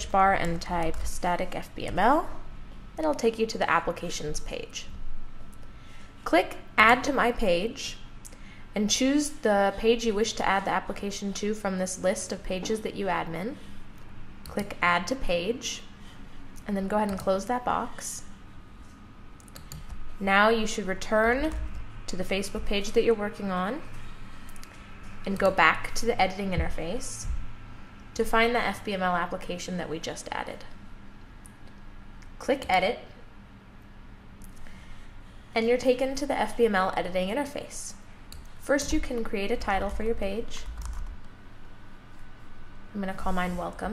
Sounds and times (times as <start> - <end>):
Speech: 0.0 - 2.4, 3.0 - 4.9, 6.3 - 8.0, 8.8 - 13.6, 14.5 - 15.9, 16.6 - 18.3, 20.2 - 23.9, 25.2 - 27.4, 28.2 - 30.8, 32.4 - 33.2, 35.6 - 38.0, 38.6 - 40.7, 43.0 - 43.9.